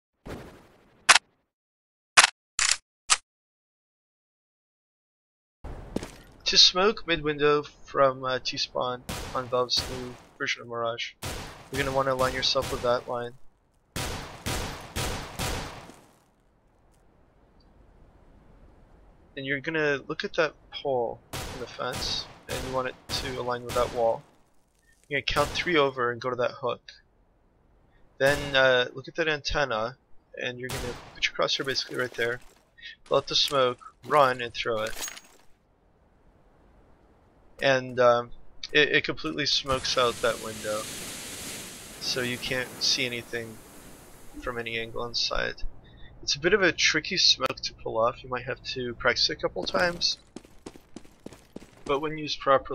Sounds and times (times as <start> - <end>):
Speech: 6.5 - 13.4, 19.4 - 24.2, 25.1 - 27.0, 28.2 - 35.0, 37.6 - 40.8, 42.0 - 43.6, 44.4 - 45.6, 46.2 - 50.2, 51.9 - 52.7.